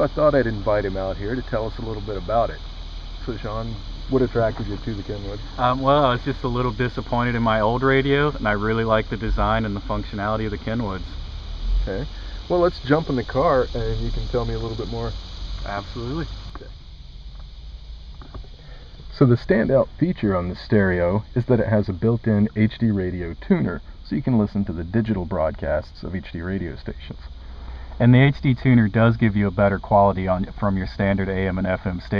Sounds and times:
Speech: 0.0 - 2.6, 3.2 - 11.2, 11.8 - 16.7, 19.1 - 27.3, 28.0 - 32.1.

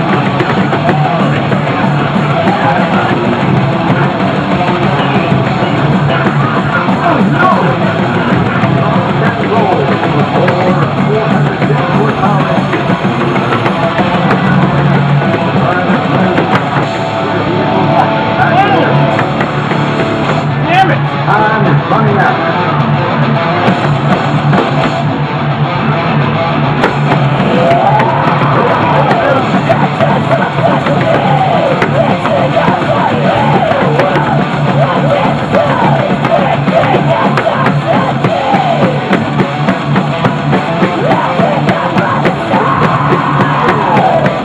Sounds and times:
Music: 0.0 - 44.4
Speech: 0.8 - 13.0, 15.3 - 16.7, 17.9 - 19.0, 20.6 - 23.2.

